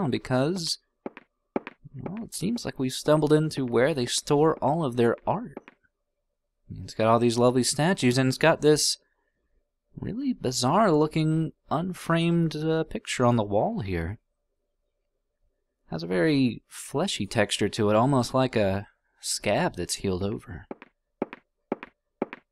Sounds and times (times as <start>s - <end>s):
Speech: 0.0s - 0.8s, 1.9s - 5.6s, 6.7s - 9.0s, 10.0s - 14.2s, 15.9s - 20.7s.